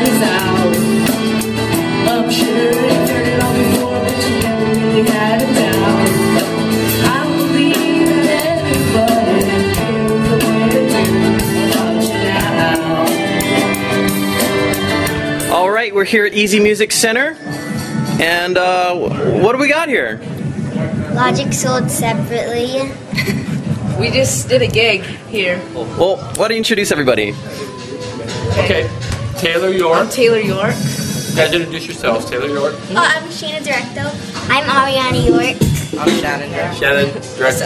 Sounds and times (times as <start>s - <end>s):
Music: 0.0s - 37.6s.